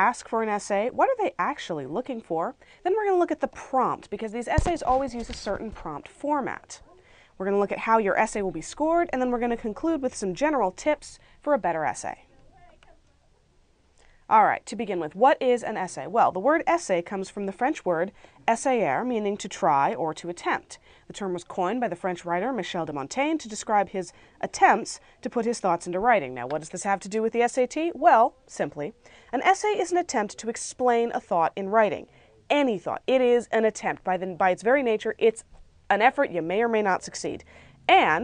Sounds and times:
Speech: 0:00.0 - 0:13.3, 0:14.3 - 0:38.2.

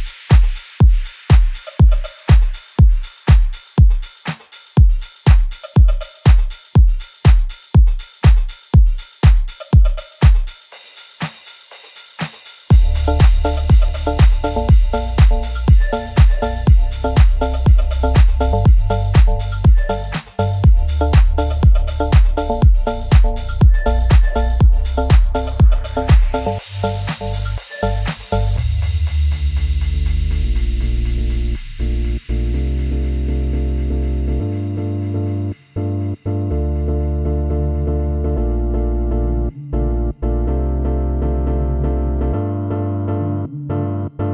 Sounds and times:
Music: 0:00.0 - 0:44.3.

